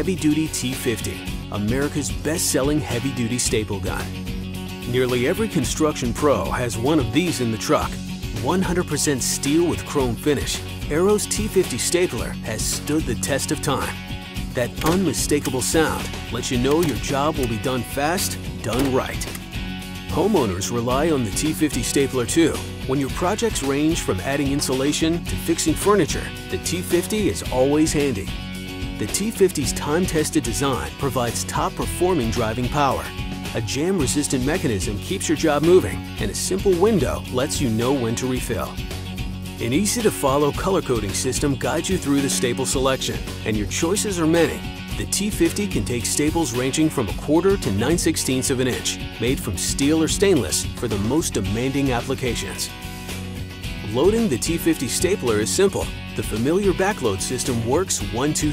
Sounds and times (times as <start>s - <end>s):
Speech: 0.0s - 4.1s, 4.9s - 14.0s, 14.6s - 19.4s, 20.1s - 28.3s, 29.0s - 38.8s, 39.6s - 52.7s, 53.8s - 58.5s
Music: 0.0s - 58.5s.